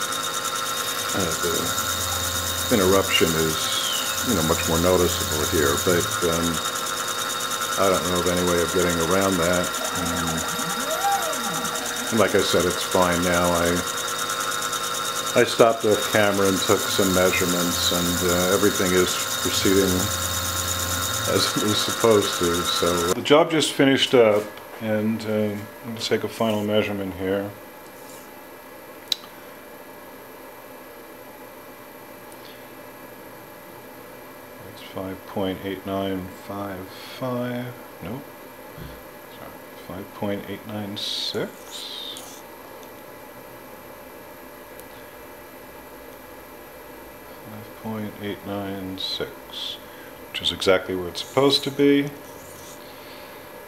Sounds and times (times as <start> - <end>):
Speech: 1.1 - 1.8, 2.7 - 6.7, 7.8 - 13.9, 15.4 - 20.2, 21.3 - 27.6, 34.6 - 38.3, 39.3 - 42.3, 47.5 - 52.2.